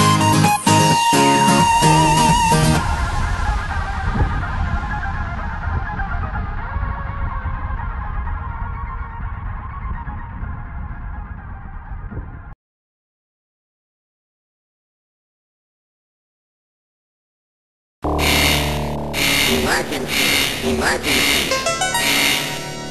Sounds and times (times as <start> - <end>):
Music: 0.0 - 12.5, 18.1 - 22.9.